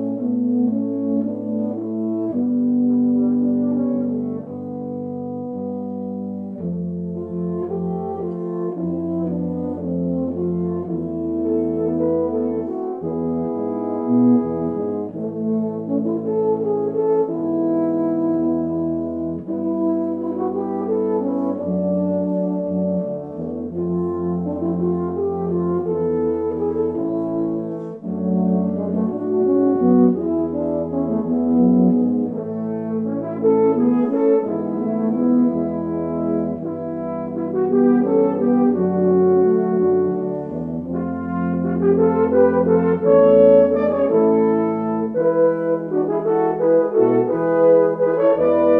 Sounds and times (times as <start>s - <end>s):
French horn: 0.0s - 48.7s.